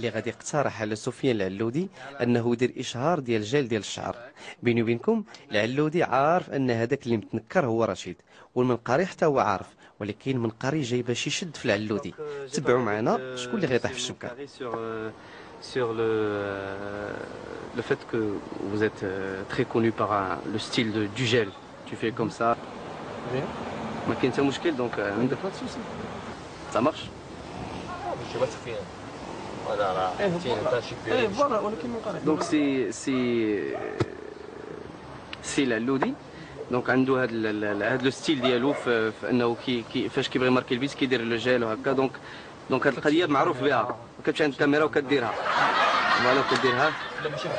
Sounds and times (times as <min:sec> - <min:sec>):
Speech: 0:00.0 - 0:22.6.